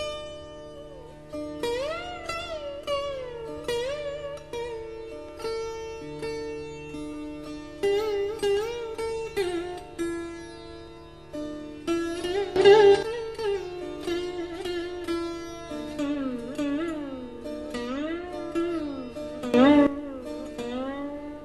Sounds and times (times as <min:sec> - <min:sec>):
Strum: 0:00.0 - 0:21.4.